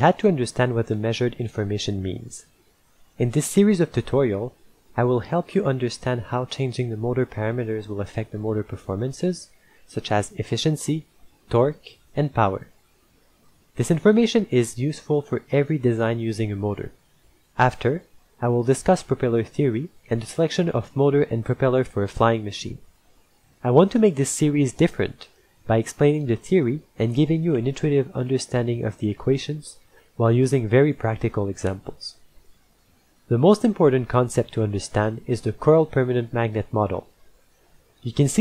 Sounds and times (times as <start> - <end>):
Speech: 0.0 - 2.5, 3.2 - 12.7, 13.8 - 17.0, 17.6 - 22.9, 23.6 - 32.2, 33.3 - 37.1, 38.0 - 38.4.